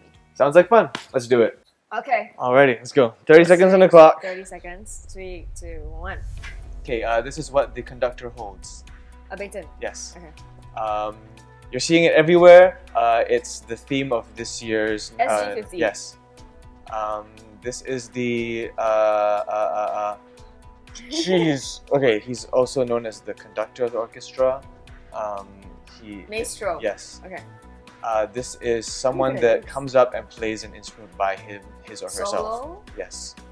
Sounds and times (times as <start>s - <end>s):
Music: 0.0s - 33.5s
Speech: 0.4s - 6.2s, 6.9s - 8.8s, 9.4s - 11.2s, 11.8s - 16.1s, 16.9s - 20.2s, 21.0s - 24.6s, 25.2s - 27.4s, 28.1s - 33.3s.